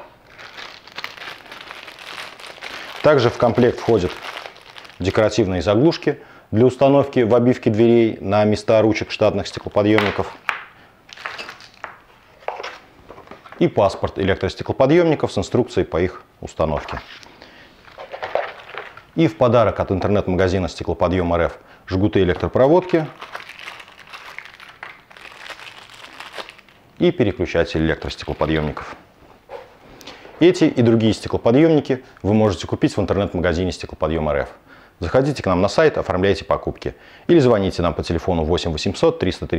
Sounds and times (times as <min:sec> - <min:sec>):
Crumpling, crinkling: 0:00.2 - 0:05.4, 0:09.4 - 0:13.6, 0:17.8 - 0:19.1, 0:22.8 - 0:27.1, 0:28.0 - 0:29.0
Speech: 0:03.0 - 0:04.3, 0:05.0 - 0:10.4, 0:13.6 - 0:17.1, 0:19.2 - 0:23.2, 0:27.0 - 0:29.0, 0:30.4 - 0:39.5.